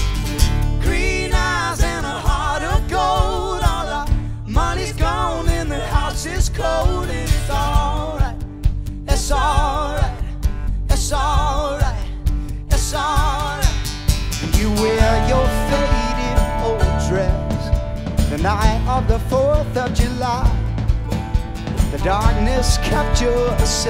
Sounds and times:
Music: 0:00.0 - 0:23.8.

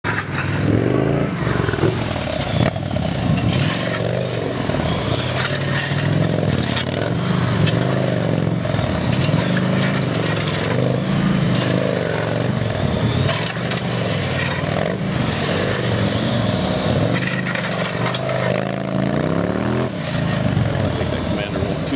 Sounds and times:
Motorcycle: 0:00.0 - 0:21.9
Outside, urban or manmade: 0:00.0 - 0:21.9.

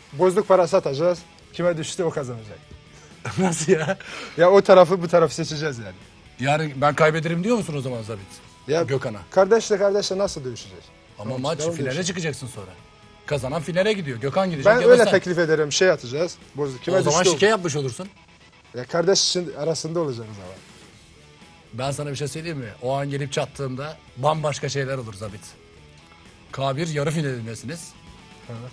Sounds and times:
Music: 0:00.0 - 0:28.7
Speech: 0:00.2 - 0:02.6, 0:03.5 - 0:18.1, 0:18.8 - 0:20.6, 0:21.8 - 0:25.6, 0:26.5 - 0:28.7.

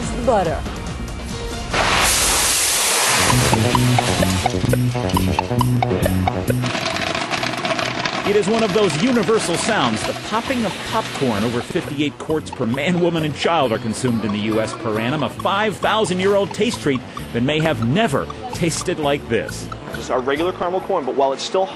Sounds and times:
Music: 0:00.0 - 0:21.0.

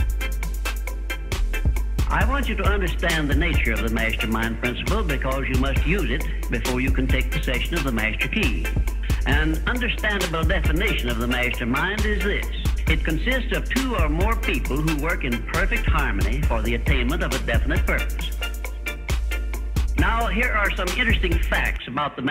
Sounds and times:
Music: 0:00.0 - 0:22.3
Speech: 0:02.1 - 0:18.3, 0:20.0 - 0:22.3.

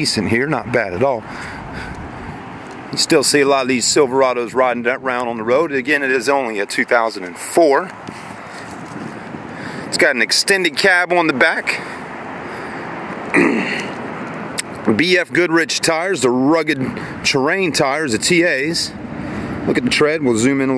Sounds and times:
Speech: 0:00.0 - 0:01.3, 0:02.9 - 0:08.0, 0:09.9 - 0:11.8, 0:14.8 - 0:19.0, 0:19.7 - 0:20.7.

